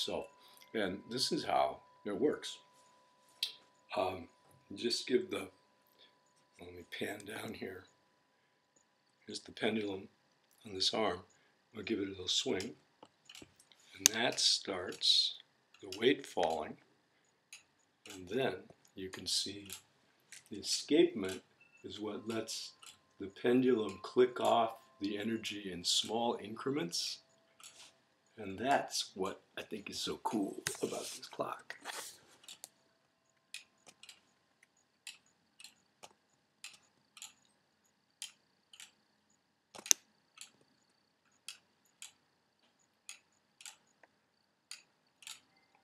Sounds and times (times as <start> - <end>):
Speech: 0.0 - 2.6, 3.9 - 5.6, 6.6 - 7.9, 9.3 - 12.8, 14.0 - 16.8, 18.1 - 19.8, 20.5 - 27.2, 28.4 - 31.9.